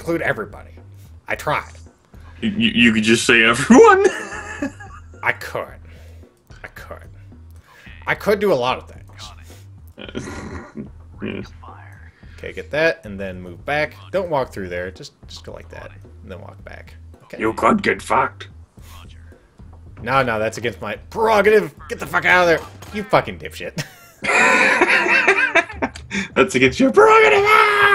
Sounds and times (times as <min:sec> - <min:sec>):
Speech: 0:07.8 - 0:09.6, 0:11.2 - 0:19.2, 0:20.0 - 0:23.8, 0:26.4 - 0:27.9.